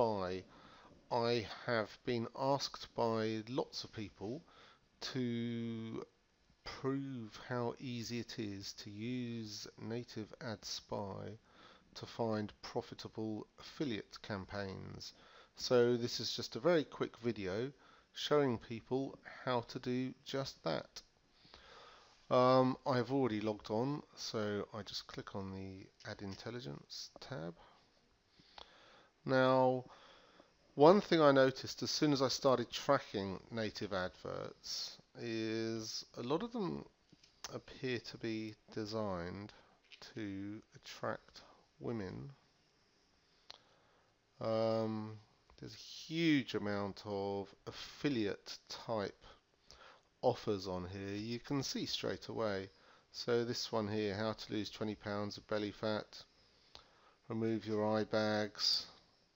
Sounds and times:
Speech: 0.0 - 0.5, 1.1 - 11.4, 12.0 - 21.1, 22.3 - 27.8, 29.2 - 29.9, 30.8 - 36.9, 37.5 - 42.4, 44.4 - 49.4, 50.2 - 56.3, 57.3 - 59.0.

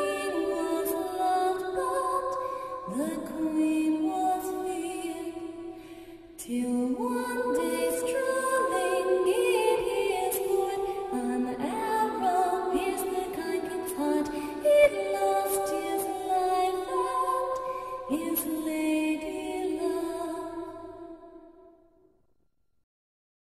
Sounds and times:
Lullaby: 0.0 - 21.5.

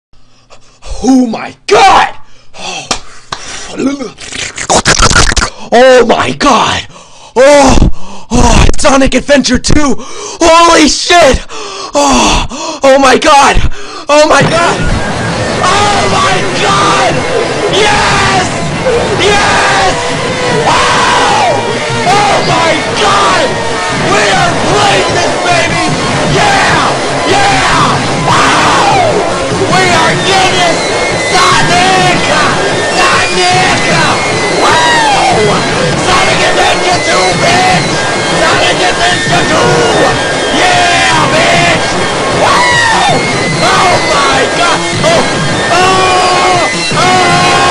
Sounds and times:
Speech: 0.9 - 2.9, 3.7 - 4.2, 5.1 - 14.9, 15.6 - 18.6, 21.4 - 28.0, 29.7 - 41.8.

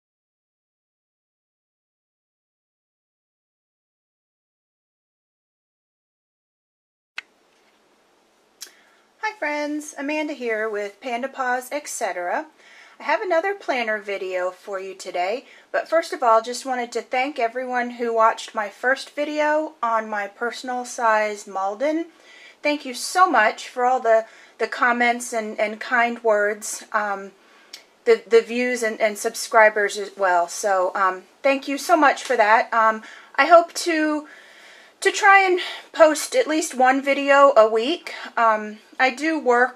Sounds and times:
Inside, small room: 7.2 - 39.7
Speech: 9.2 - 34.3, 35.0 - 39.7.

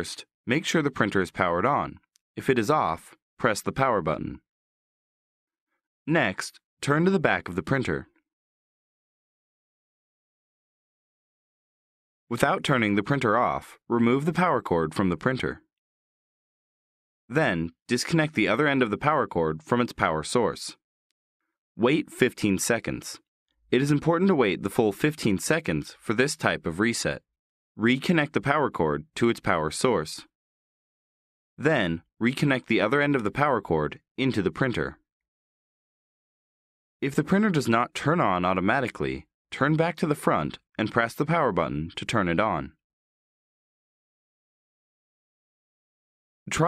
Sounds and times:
Speech: 0.0 - 4.4, 6.1 - 8.2, 12.3 - 15.7, 17.3 - 20.8, 21.8 - 27.2, 27.8 - 30.3, 31.6 - 35.0, 37.0 - 42.8.

